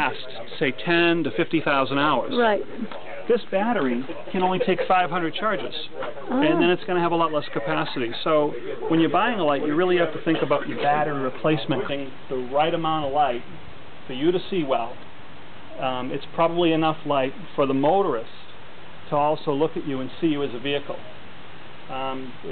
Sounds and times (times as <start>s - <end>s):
Speech: 0.0s - 15.0s, 15.8s - 18.5s, 19.1s - 21.0s, 21.9s - 22.5s.